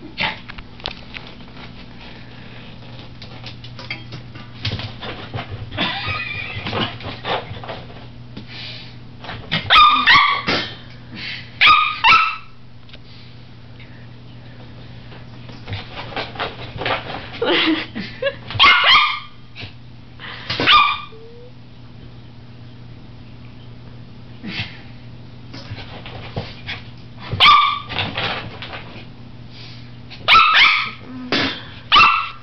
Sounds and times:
Yip: 9.7 - 10.5, 11.6 - 12.6, 18.6 - 19.4, 20.6 - 21.2, 27.4 - 27.9, 30.3 - 31.0, 31.9 - 32.4
Bow-wow: 9.7 - 10.6, 11.6 - 12.5, 18.6 - 19.3, 27.4 - 27.9, 30.3 - 31.0, 31.9 - 32.4.

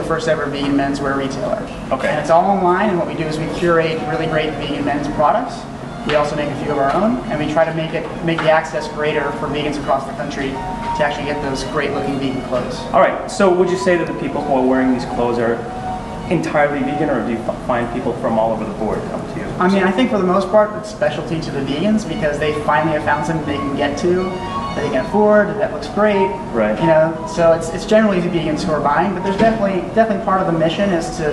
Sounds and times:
Speech: 0.0 - 15.7, 16.3 - 31.3
Music: 0.0 - 31.3.

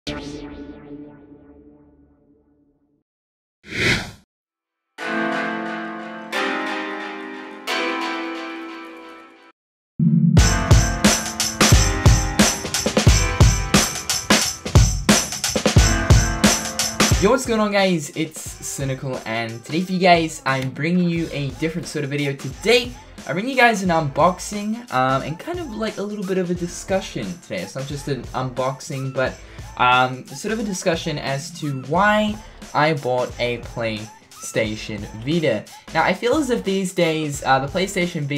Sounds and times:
Music: 0.1 - 3.0, 5.0 - 38.3.

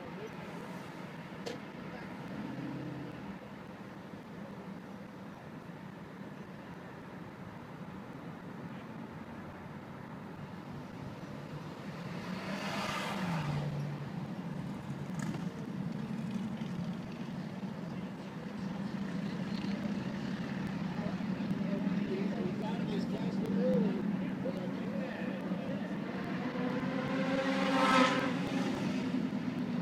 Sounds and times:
Speech: 0.0 - 1.0, 20.9 - 26.2
Vehicle: 0.0 - 29.8.

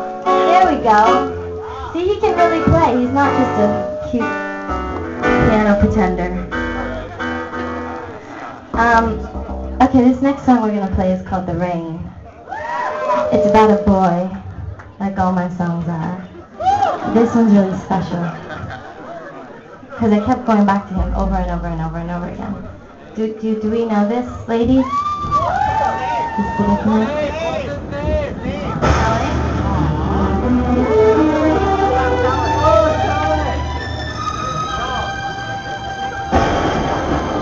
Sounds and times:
Speech: 1.9 - 4.3, 5.4 - 6.5, 8.8 - 12.2, 13.3 - 14.4, 19.9 - 24.9.

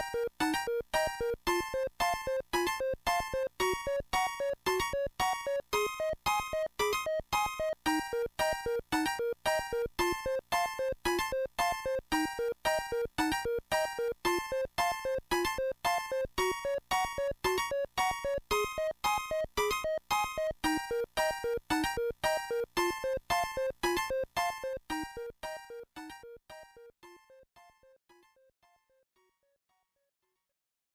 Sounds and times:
Music: 0.0 - 30.4.

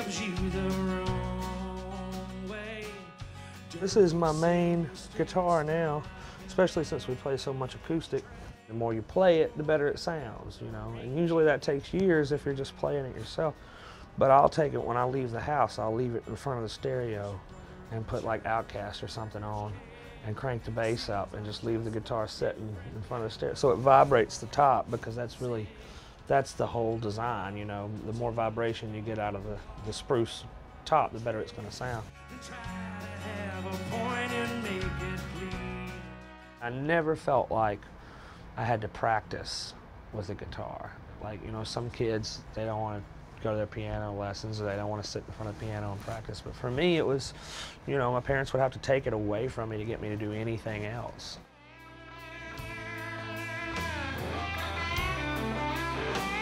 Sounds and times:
Guitar: 0.0 - 56.4
Speech: 3.8 - 13.6, 14.2 - 32.1, 36.6 - 37.9, 38.6 - 51.4.

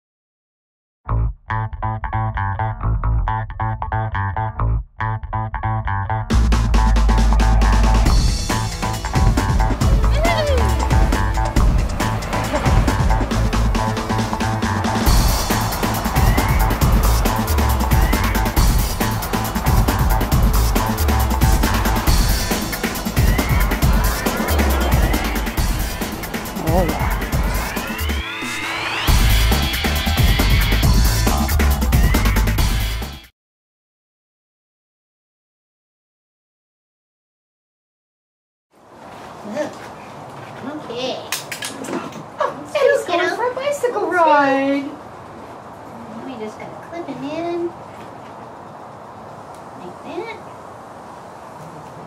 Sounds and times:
Music: 1.1 - 33.3.

